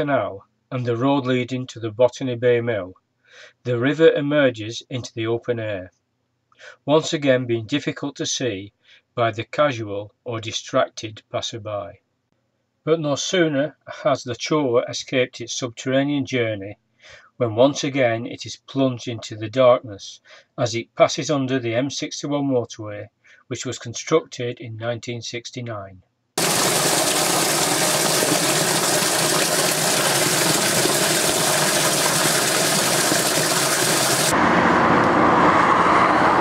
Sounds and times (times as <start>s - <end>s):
Speech: 0.0s - 3.0s, 3.6s - 5.9s, 6.7s - 12.0s, 12.9s - 26.0s
Stream: 26.4s - 34.4s.